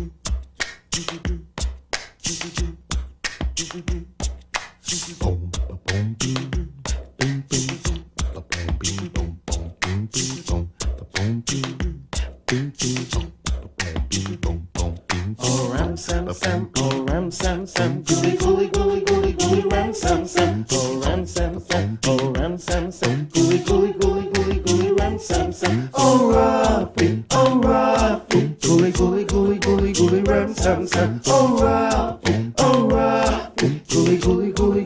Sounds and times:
Music: 0:00.0 - 0:34.8.

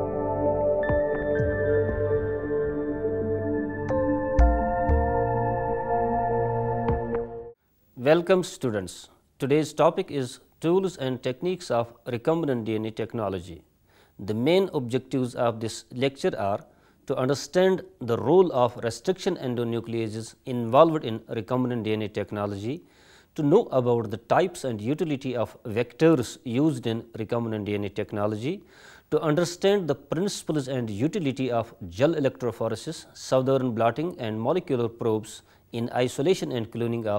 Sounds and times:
Speech: 0:08.0 - 0:37.1.

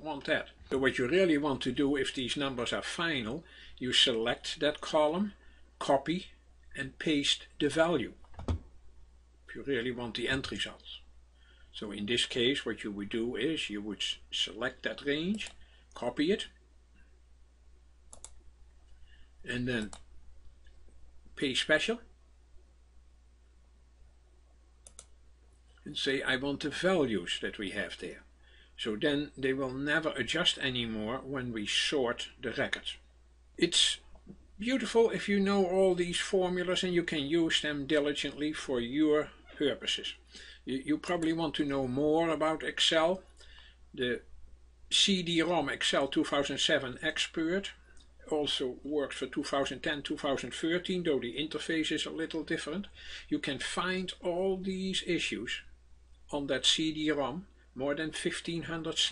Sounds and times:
Speech: 0:00.0 - 0:08.2, 0:09.5 - 0:11.1, 0:11.7 - 0:16.6, 0:19.4 - 0:20.0, 0:21.4 - 0:22.1, 0:25.8 - 0:43.3, 0:44.0 - 0:44.3, 0:44.9 - 0:55.7, 0:56.3 - 0:59.1
Clicking: 0:18.1 - 0:18.4, 0:24.8 - 0:25.2.

